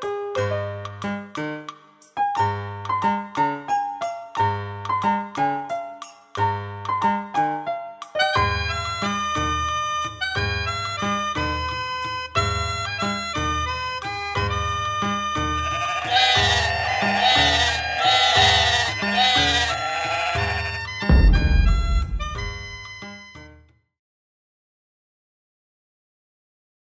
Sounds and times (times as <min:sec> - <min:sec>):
Music: 0:00.0 - 0:24.0
Bleat: 0:15.6 - 0:20.9.